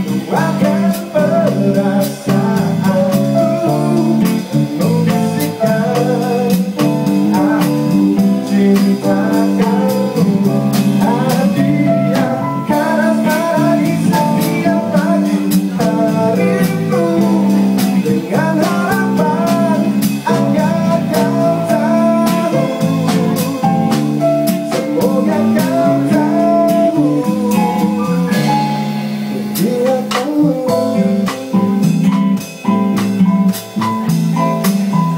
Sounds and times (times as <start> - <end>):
Acoustic guitar: 0.0 - 35.1.